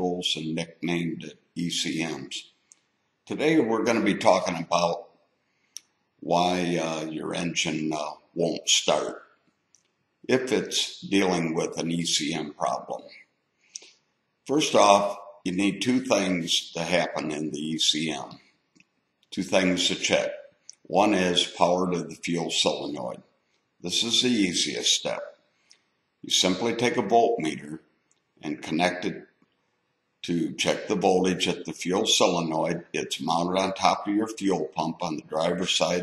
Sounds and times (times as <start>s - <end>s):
Speech: 0.0s - 2.4s, 3.3s - 5.0s, 6.2s - 9.2s, 10.3s - 13.2s, 14.5s - 18.4s, 19.4s - 23.2s, 23.9s - 25.3s, 26.3s - 27.8s, 28.4s - 29.2s, 30.2s - 36.0s.